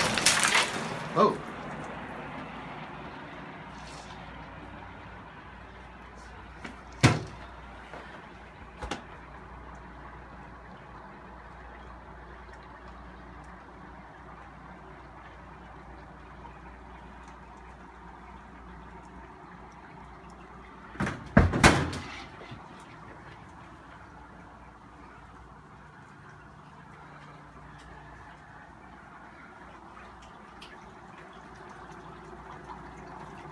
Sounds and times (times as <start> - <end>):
Boiling: 0.0 - 33.5.